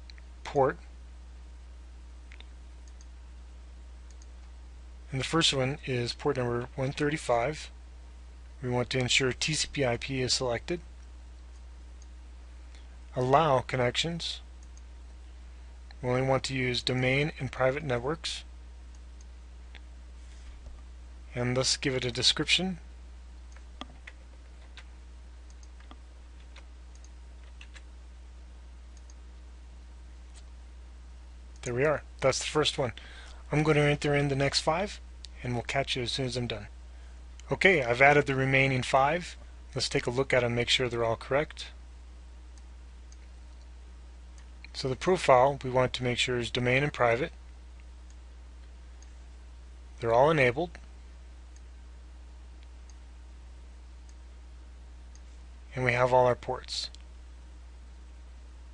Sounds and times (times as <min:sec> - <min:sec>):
Speech: 0:00.4 - 0:00.9, 0:05.1 - 0:07.8, 0:08.6 - 0:10.9, 0:13.1 - 0:14.5, 0:16.0 - 0:18.5, 0:21.3 - 0:22.8, 0:31.6 - 0:36.7, 0:37.4 - 0:41.8, 0:44.7 - 0:47.4, 0:50.0 - 0:50.8, 0:55.7 - 0:57.0
Clicking: 0:02.3 - 0:03.1, 0:04.1 - 0:04.5, 0:14.6 - 0:14.9, 0:25.5 - 0:27.8, 0:29.0 - 0:29.2, 0:47.8 - 0:49.2, 0:52.6 - 0:53.0.